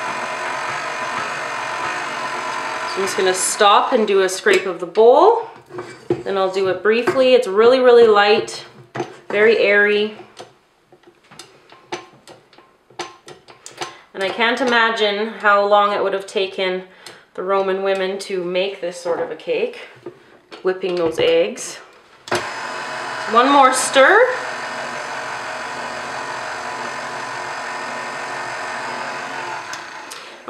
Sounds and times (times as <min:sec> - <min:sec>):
Blender: 0:00.0 - 0:04.1, 0:22.3 - 0:30.4.